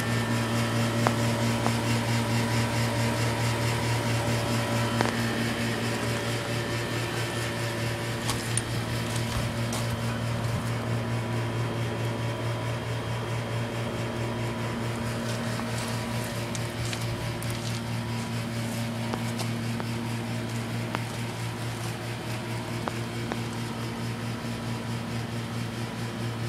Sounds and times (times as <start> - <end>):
Air conditioning: 0.0 - 26.4.